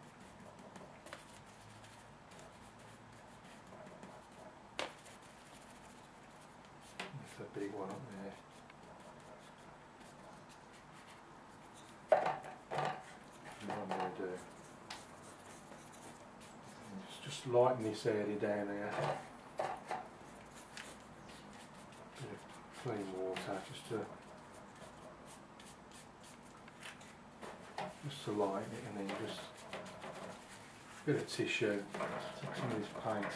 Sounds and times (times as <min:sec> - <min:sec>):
Inside, small room: 0:00.0 - 0:33.3
Speech: 0:07.2 - 0:08.4, 0:13.6 - 0:14.5, 0:16.9 - 0:19.1, 0:22.2 - 0:24.2, 0:28.0 - 0:29.5, 0:31.1 - 0:33.3.